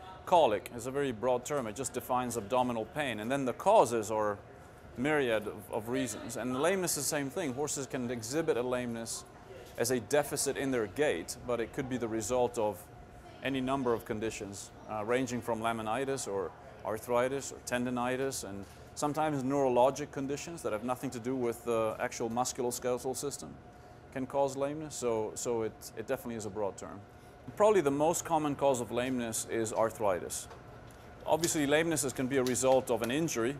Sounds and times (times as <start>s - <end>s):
Speech: 0.0s - 4.4s, 5.0s - 30.5s, 31.2s - 33.6s.